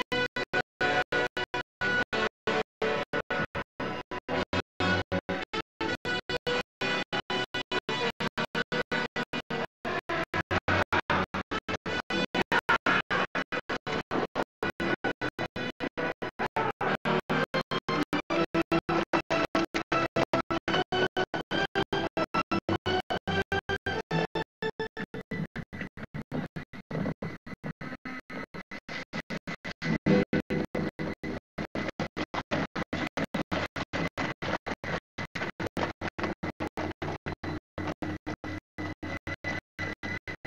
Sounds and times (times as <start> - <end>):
Music: 0.0 - 40.4.